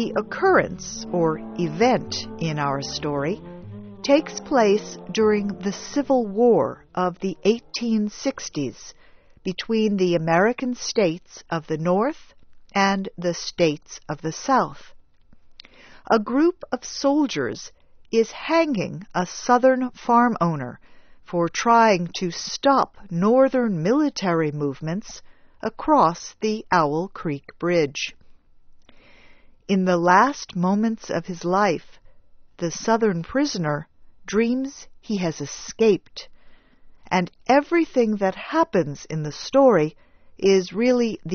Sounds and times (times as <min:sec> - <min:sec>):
Speech: 0:00.0 - 0:03.4, 0:04.0 - 0:14.9, 0:16.1 - 0:28.2, 0:29.7 - 0:32.0, 0:32.6 - 0:36.3, 0:37.1 - 0:41.3.